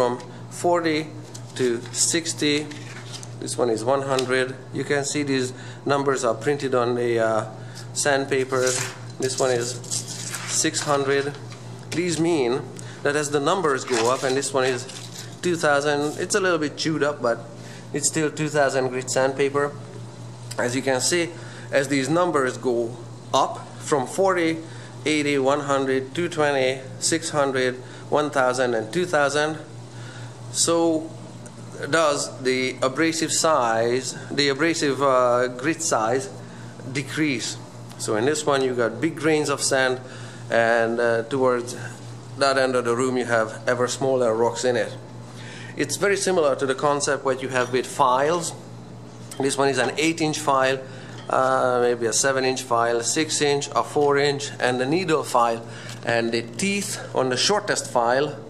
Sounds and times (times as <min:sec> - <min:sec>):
Speech: 0:00.0 - 0:02.8, 0:03.4 - 0:19.9, 0:20.5 - 0:29.7, 0:30.5 - 0:45.0, 0:45.8 - 0:48.7, 0:49.4 - 0:58.4.